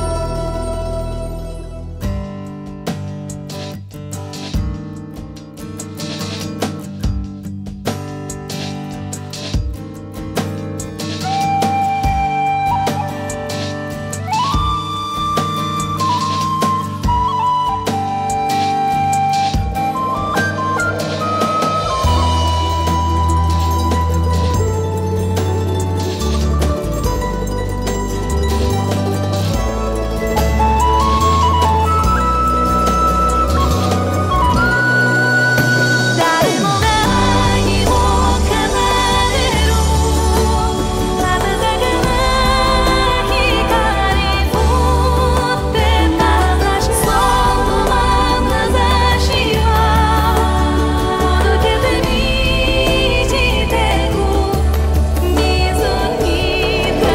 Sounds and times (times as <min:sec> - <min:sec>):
Exciting music: 0:11.2 - 0:57.1.